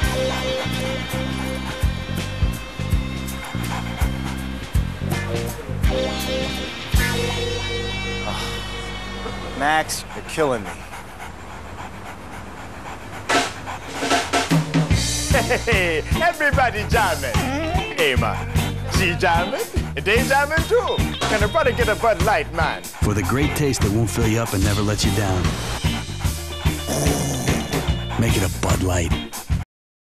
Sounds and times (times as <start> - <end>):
Dog: 0.0 - 7.7, 9.5 - 29.6
Music: 0.0 - 10.2, 14.0 - 29.6
Speech: 16.2 - 25.5, 28.2 - 29.2.